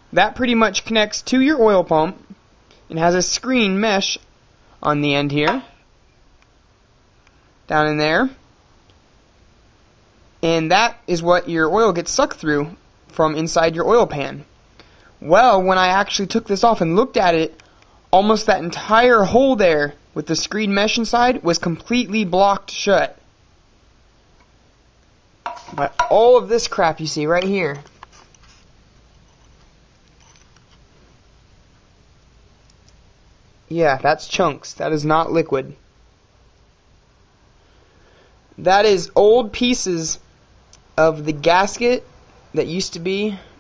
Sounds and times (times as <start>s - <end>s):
Inside, small room: 0.0s - 43.6s
Speech: 0.1s - 5.8s, 7.7s - 8.4s, 10.4s - 14.5s, 15.2s - 17.6s, 18.2s - 23.2s, 25.7s - 27.9s, 33.7s - 35.8s, 38.6s - 40.2s, 41.0s - 43.5s.